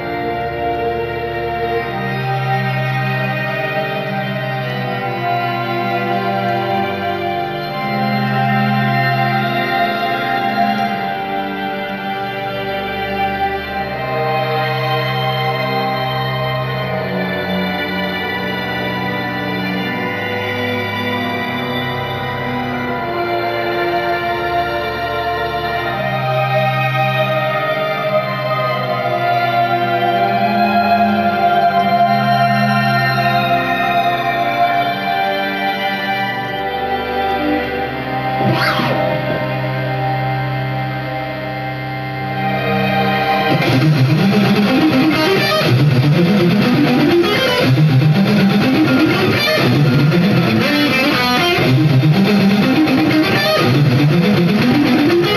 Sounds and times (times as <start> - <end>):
Guitar: 0.0 - 55.3.